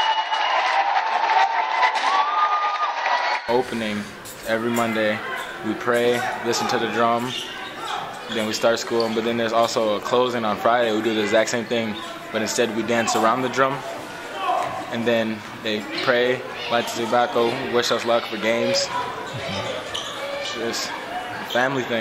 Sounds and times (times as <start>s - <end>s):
Inside, large room or hall: 0.0s - 22.0s
Speech: 3.5s - 22.0s.